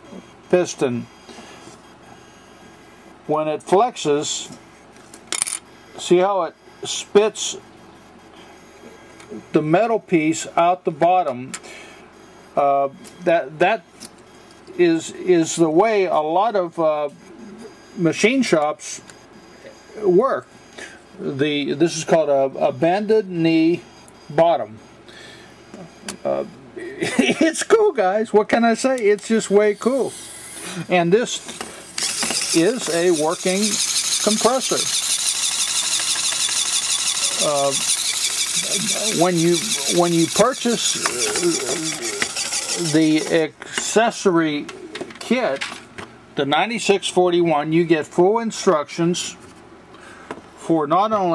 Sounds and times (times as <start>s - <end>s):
Inside, small room: 0.0s - 51.3s
Speech: 0.5s - 1.1s, 3.3s - 4.5s, 6.0s - 7.6s, 9.5s - 11.5s, 12.6s - 13.8s, 14.8s - 17.2s, 18.0s - 19.1s, 20.0s - 20.5s, 21.2s - 24.8s, 26.2s - 30.2s, 30.8s - 31.4s, 32.5s - 34.9s, 37.3s - 37.8s, 38.6s - 45.7s, 46.4s - 49.4s, 50.6s - 51.3s.